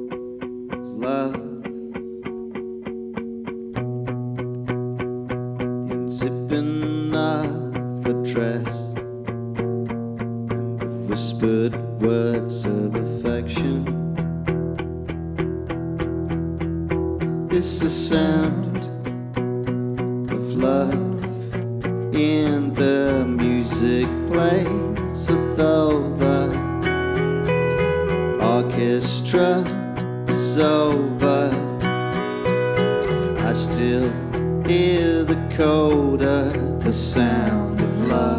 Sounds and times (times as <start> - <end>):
Acoustic guitar: 0.0 - 38.3.